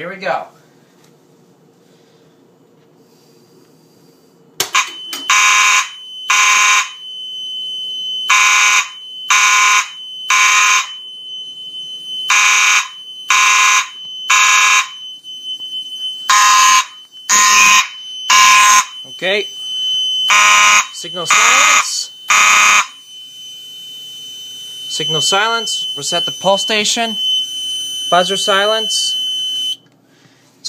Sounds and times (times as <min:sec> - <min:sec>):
Speech: 0:00.0 - 0:00.6, 0:19.1 - 0:19.5, 0:21.0 - 0:22.2, 0:24.9 - 0:27.2, 0:28.1 - 0:29.2
Fire alarm: 0:04.6 - 0:29.9.